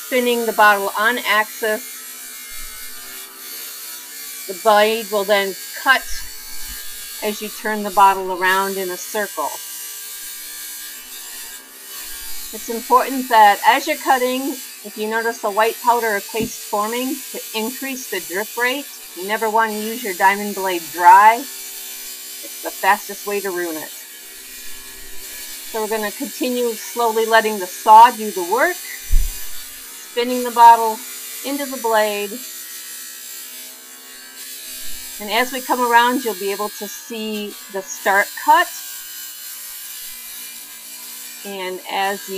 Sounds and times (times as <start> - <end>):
Speech: 0.0 - 1.8, 4.5 - 6.3, 7.2 - 9.6, 12.6 - 21.5, 22.5 - 24.0, 25.7 - 29.0, 30.1 - 32.4, 35.2 - 38.8, 41.5 - 42.3.